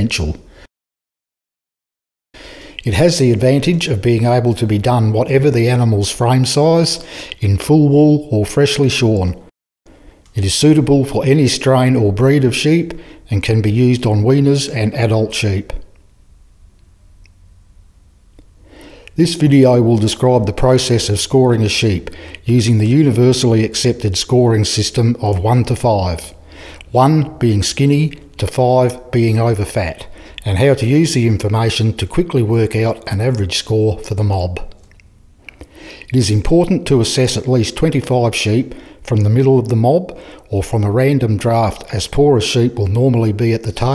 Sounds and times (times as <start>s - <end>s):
Speech: 0.0s - 0.4s, 2.8s - 9.5s, 10.4s - 15.8s, 19.2s - 34.8s, 36.1s - 43.9s.